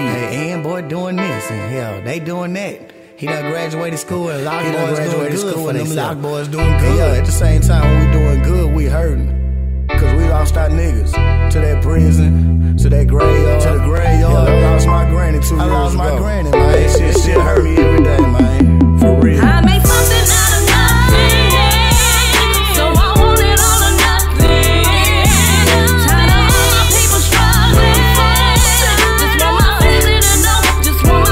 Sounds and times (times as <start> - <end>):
Music: 0.0 - 31.3.